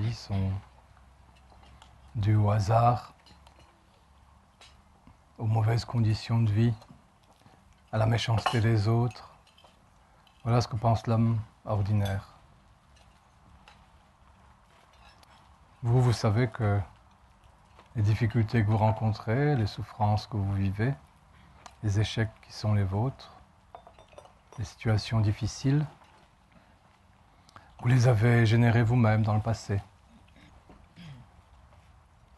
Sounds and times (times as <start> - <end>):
Speech: 0.0 - 0.7, 2.2 - 3.2, 5.4 - 6.9, 7.9 - 9.4, 10.4 - 12.4, 15.8 - 16.9, 17.9 - 21.0, 21.8 - 23.4, 24.6 - 26.0, 27.8 - 29.9.